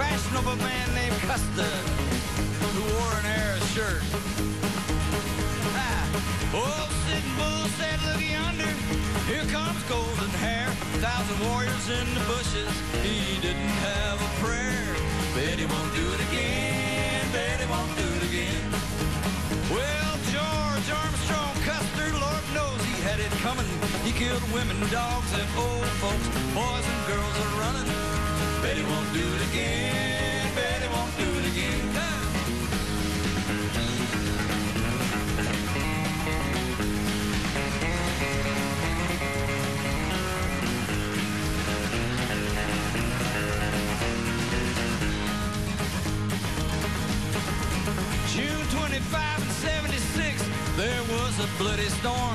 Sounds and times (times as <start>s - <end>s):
Music: 0.0s - 52.3s.